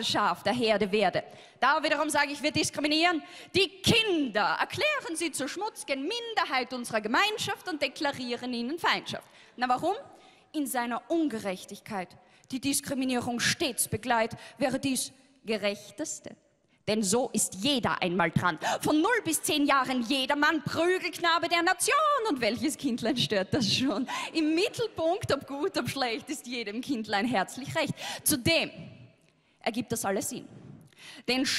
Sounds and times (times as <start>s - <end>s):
Speech: 0.0s - 28.8s, 29.7s - 30.4s, 31.3s - 31.5s.